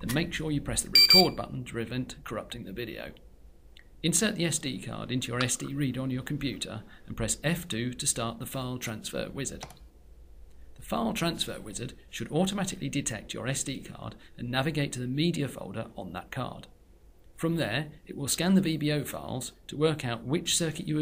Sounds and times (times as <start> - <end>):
Speech: 0.0 - 3.2, 4.0 - 9.7, 10.8 - 16.8, 17.4 - 21.0.